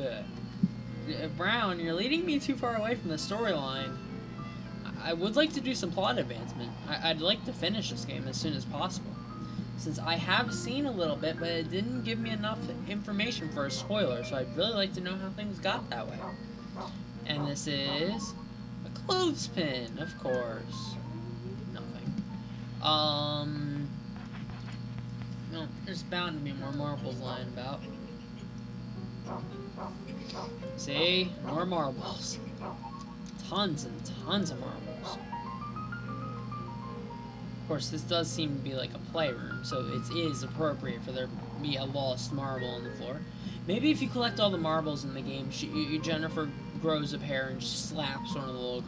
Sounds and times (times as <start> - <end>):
Speech: 0.0 - 0.3, 1.1 - 4.0, 4.9 - 9.2, 9.8 - 16.3, 17.3 - 21.0, 22.8 - 24.0, 25.5 - 27.9, 30.8 - 32.5, 33.4 - 35.2, 37.7 - 48.8
Music: 0.0 - 48.8.